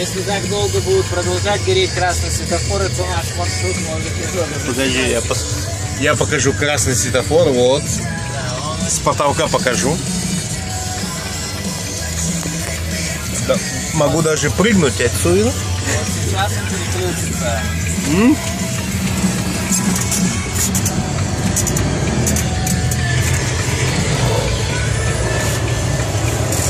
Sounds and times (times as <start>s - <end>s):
Music: 0.0s - 26.7s
Speech: 8.7s - 10.0s, 13.5s - 18.4s.